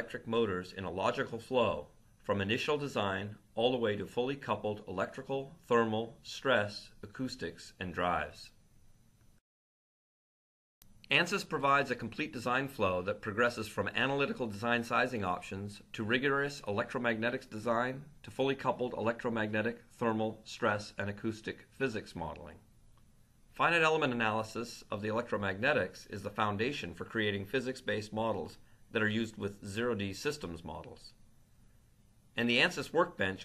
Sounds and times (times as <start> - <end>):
Speech: 0.0 - 8.6, 11.1 - 22.7, 23.6 - 31.2, 32.4 - 33.4.